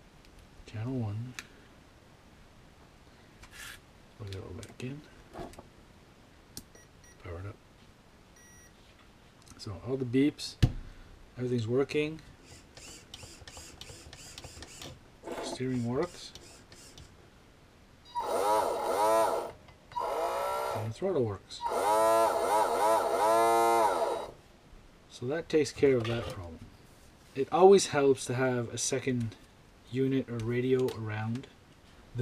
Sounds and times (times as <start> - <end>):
Inside, small room: 0.0 - 32.2
Speech: 0.7 - 1.4, 4.2 - 5.1, 7.2 - 7.6, 9.6 - 10.6, 11.4 - 12.2, 15.4 - 16.4, 20.8 - 21.6, 25.1 - 26.6, 27.4 - 31.5.